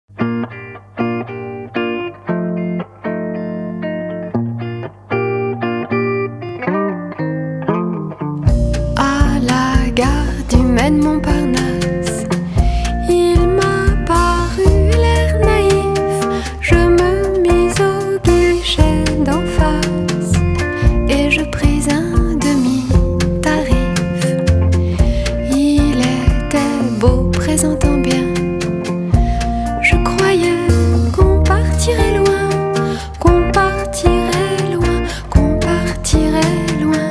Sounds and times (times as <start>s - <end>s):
Effects unit: 0.1s - 37.1s.